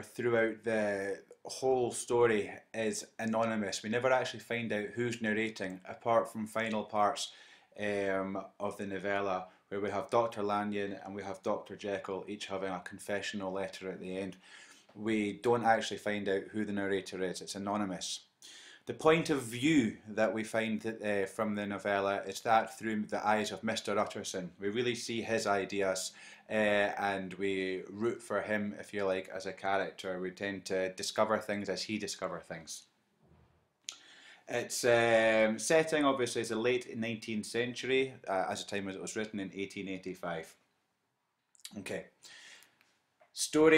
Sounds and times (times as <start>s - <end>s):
Speech: 0.0s - 14.4s, 15.0s - 18.3s, 18.9s - 32.9s, 34.5s - 40.6s, 41.7s - 42.2s, 43.4s - 43.7s.